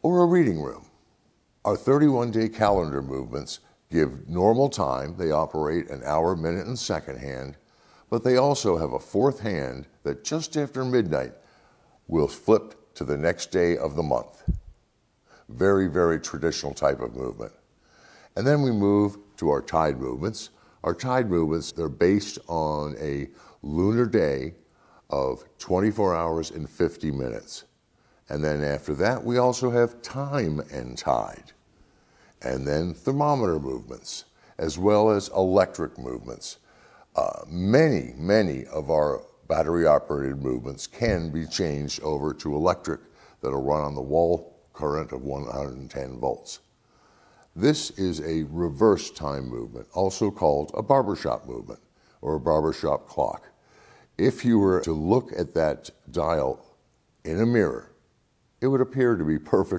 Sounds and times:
Speech: 0:00.0 - 0:01.0, 0:01.6 - 0:11.5, 0:12.1 - 0:14.7, 0:15.4 - 0:17.7, 0:18.3 - 0:31.6, 0:32.4 - 0:46.7, 0:47.5 - 0:53.6, 0:54.2 - 0:58.0, 0:58.6 - 0:59.7.

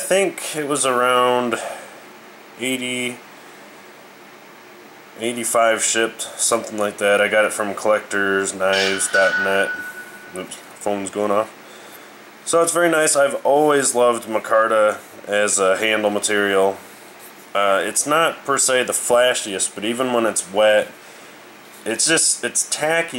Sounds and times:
Speech: 0:00.0 - 0:01.9, 0:02.6 - 0:03.2, 0:05.2 - 0:09.8, 0:10.4 - 0:11.6, 0:12.4 - 0:16.8, 0:17.6 - 0:21.0, 0:21.8 - 0:23.1.

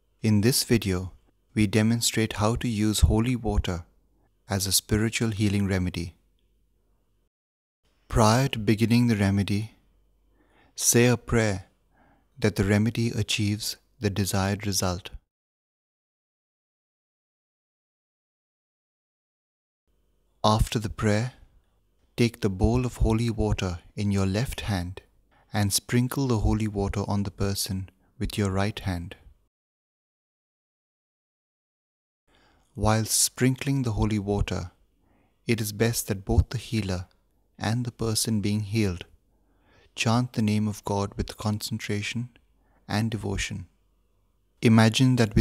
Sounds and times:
Speech: 0:00.2 - 0:03.9, 0:04.5 - 0:06.2, 0:08.1 - 0:09.8, 0:10.8 - 0:11.8, 0:12.4 - 0:15.3, 0:20.4 - 0:21.5, 0:22.2 - 0:29.4, 0:32.8 - 0:34.8, 0:35.5 - 0:39.2, 0:40.0 - 0:43.8, 0:44.6 - 0:45.4.

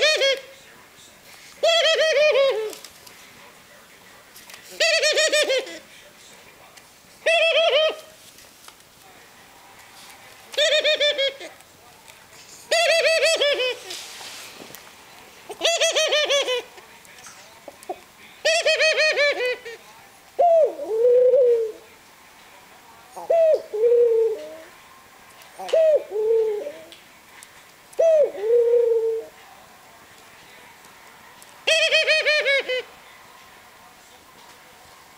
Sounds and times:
Coo: 0:20.4 - 0:21.9, 0:23.2 - 0:24.7, 0:25.6 - 0:26.9, 0:28.0 - 0:29.3.

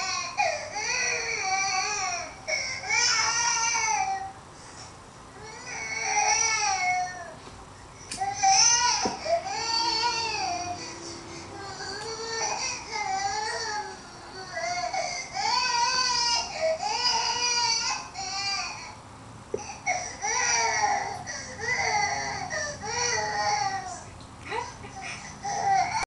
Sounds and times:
Baby cry, infant cry: 0:00.0 - 0:04.3, 0:19.6 - 0:24.1, 0:24.9 - 0:26.0
Speech: 0:23.1 - 0:25.3.

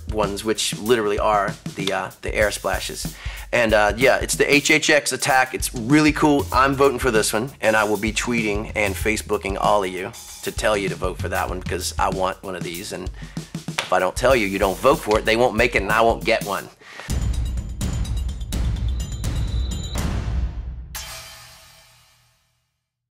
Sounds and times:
Speech: 0:00.0 - 0:13.1, 0:13.8 - 0:16.8
Music: 0:00.0 - 0:23.0.

